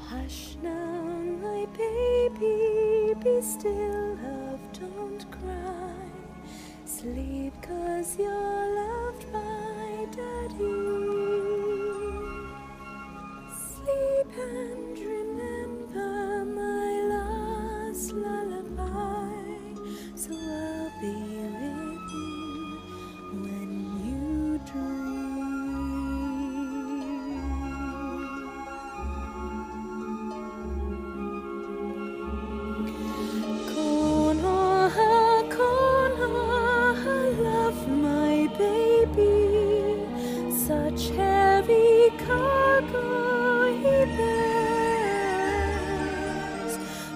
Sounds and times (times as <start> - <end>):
Lullaby: 0.0 - 47.1.